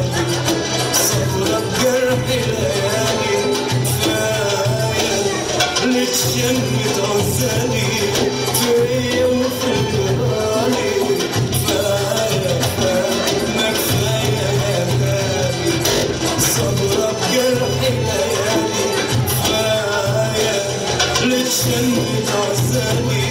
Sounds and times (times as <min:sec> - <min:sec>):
Salsa music: 0:00.0 - 0:23.3.